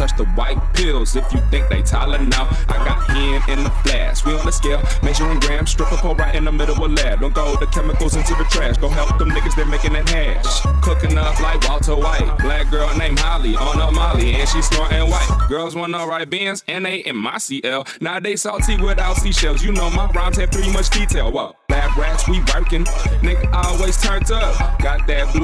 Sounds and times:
Music: 0.0s - 15.5s, 18.6s - 25.4s.

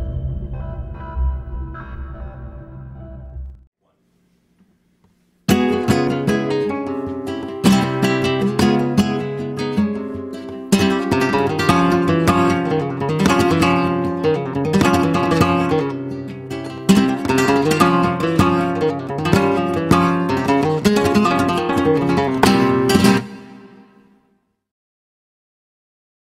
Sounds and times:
Flamenco: 5.5s - 24.0s
Guitar: 5.5s - 24.2s.

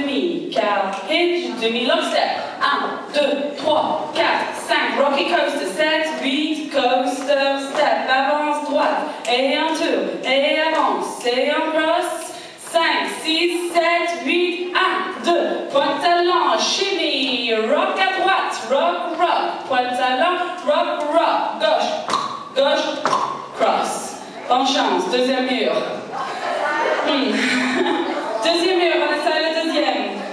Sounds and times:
Speech: 0.0s - 23.0s, 23.6s - 26.1s, 26.7s - 30.3s.

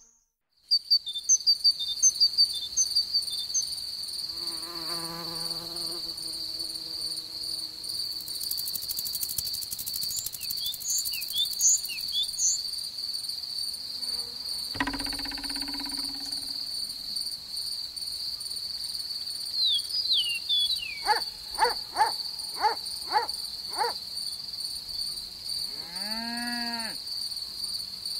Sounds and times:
Cricket: 0.0s - 28.1s
Bee, wasp, etc.: 4.0s - 12.6s, 13.2s - 17.3s
Fly, housefly: 4.2s - 12.6s, 13.2s - 17.3s
Mosquito: 4.3s - 8.4s, 25.7s - 27.0s.

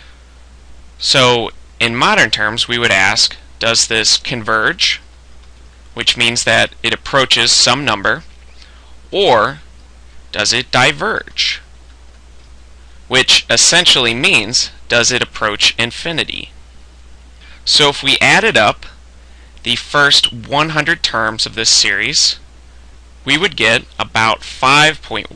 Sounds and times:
Speech: 1.0s - 5.1s, 6.0s - 8.3s, 9.1s - 9.7s, 10.3s - 11.7s, 13.1s - 16.6s, 17.6s - 19.0s, 19.6s - 22.5s, 23.2s - 25.3s.

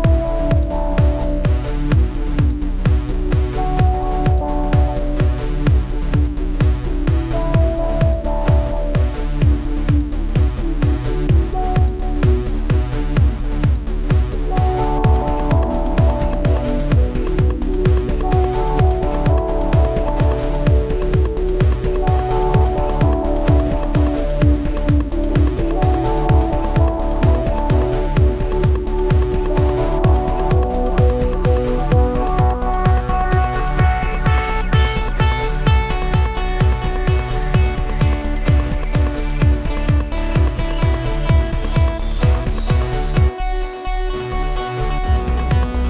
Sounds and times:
Electronica: 0.0s - 45.8s.

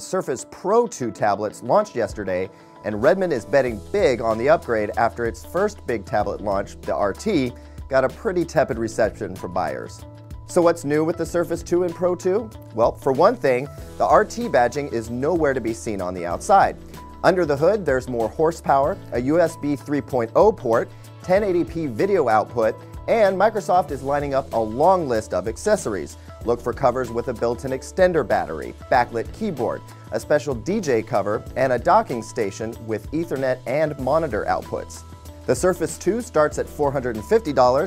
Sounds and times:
Music: 0.0s - 37.8s
Speech: 0.0s - 37.8s.

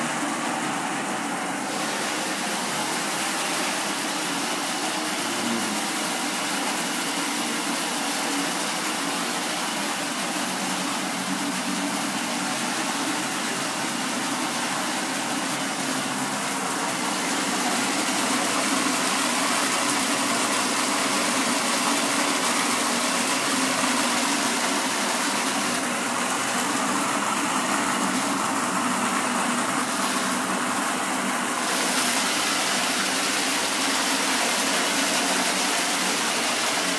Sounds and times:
Waterfall: 1.6s - 36.9s.

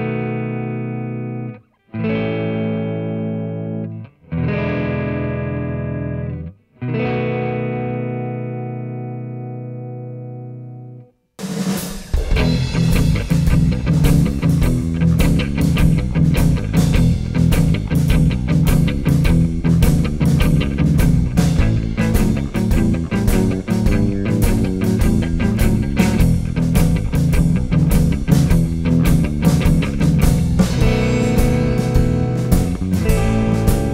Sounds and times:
Rock music: 0.0s - 10.8s, 11.4s - 33.9s
Blues: 0.0s - 33.9s
Electric guitar: 0.0s - 33.9s.

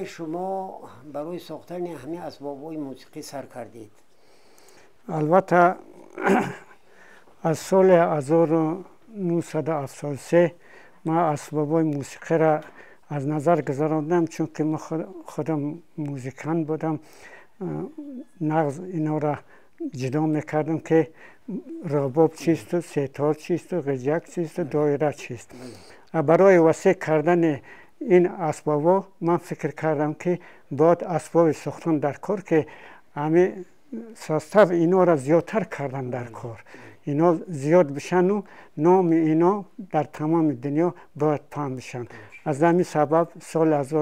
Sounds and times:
Speech: 0.0s - 4.0s, 5.1s - 6.6s, 7.4s - 17.0s, 17.6s - 25.5s, 26.1s - 44.0s.

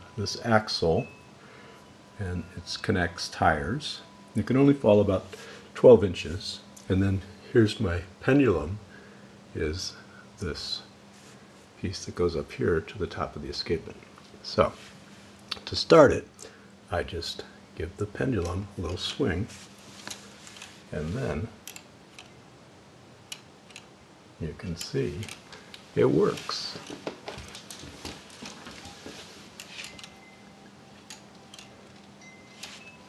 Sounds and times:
Speech: 0.2s - 1.1s, 2.2s - 8.9s, 9.5s - 10.9s, 11.8s - 14.8s, 15.5s - 19.6s, 20.9s - 21.6s, 24.4s - 25.4s, 26.0s - 26.9s.

